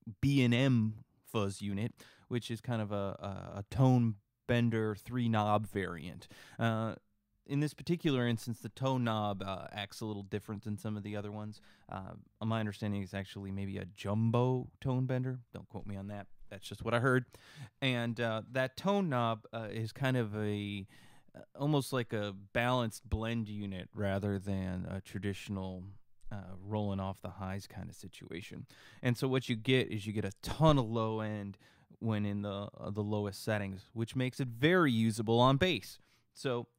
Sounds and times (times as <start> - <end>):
Speech: 0.0 - 36.7.